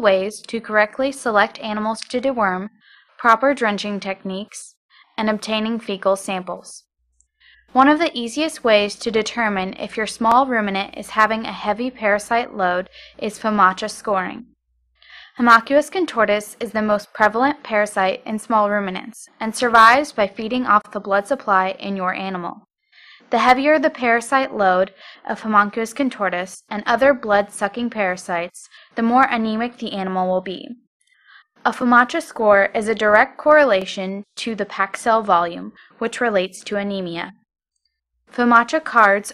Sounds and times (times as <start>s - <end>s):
Speech: 0.0s - 6.9s, 7.7s - 14.5s, 15.1s - 22.7s, 23.3s - 30.8s, 31.6s - 37.4s, 38.4s - 39.3s.